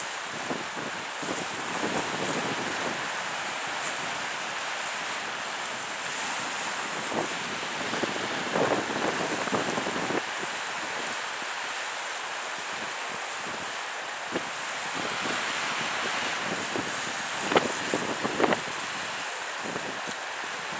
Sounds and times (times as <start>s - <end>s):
Ship: 0.0s - 20.7s
Waves, surf: 0.0s - 20.7s.